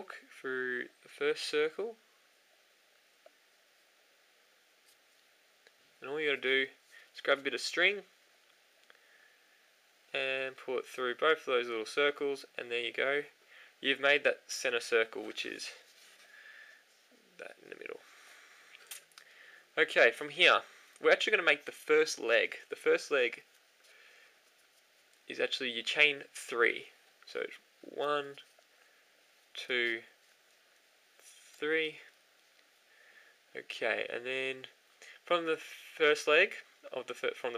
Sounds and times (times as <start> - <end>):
Speech: 0.0 - 2.0, 6.0 - 8.1, 10.1 - 15.8, 17.4 - 18.1, 19.8 - 23.4, 25.3 - 28.4, 29.5 - 30.2, 31.6 - 32.1, 33.5 - 37.5
Inside, small room: 0.0 - 37.5.